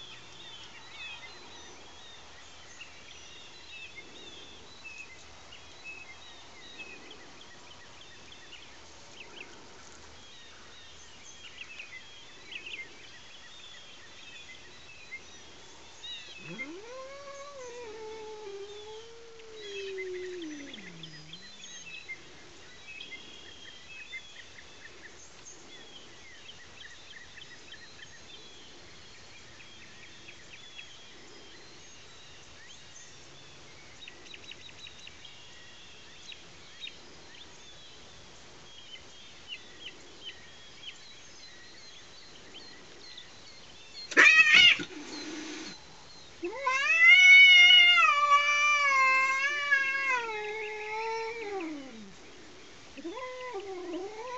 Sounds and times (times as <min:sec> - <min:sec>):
Cat: 0:16.3 - 0:21.9, 0:44.1 - 0:45.8, 0:46.4 - 0:52.2, 0:53.0 - 0:54.3.